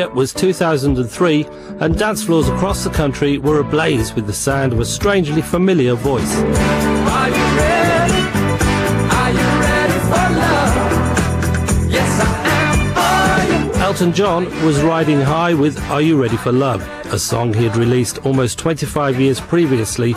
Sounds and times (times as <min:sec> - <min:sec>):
Speech: 0:00.0 - 0:06.4, 0:13.8 - 0:20.1
Music: 0:00.0 - 0:20.1.